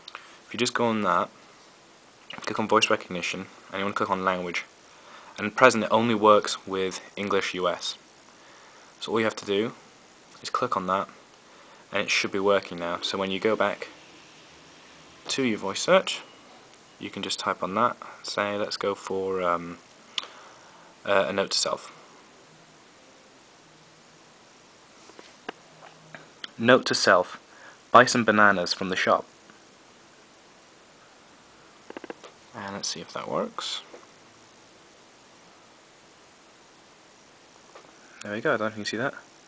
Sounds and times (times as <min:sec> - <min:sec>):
Speech: 0:00.5 - 0:01.3, 0:02.4 - 0:04.7, 0:05.4 - 0:08.0, 0:09.0 - 0:09.8, 0:10.4 - 0:11.2, 0:11.9 - 0:14.0, 0:15.3 - 0:16.3, 0:17.0 - 0:19.8, 0:21.0 - 0:22.0, 0:26.5 - 0:29.3, 0:32.5 - 0:33.9, 0:38.2 - 0:39.3.